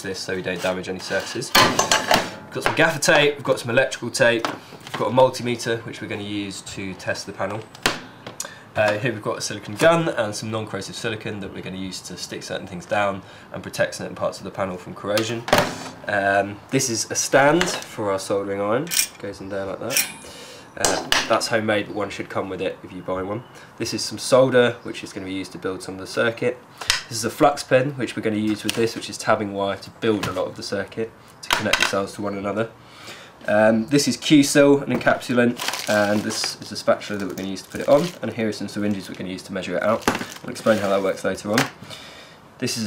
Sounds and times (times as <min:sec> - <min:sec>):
Speech: 0:00.0 - 0:01.8, 0:02.5 - 0:07.7, 0:08.8 - 0:20.1, 0:20.8 - 0:32.8, 0:33.4 - 0:41.8, 0:42.6 - 0:42.8.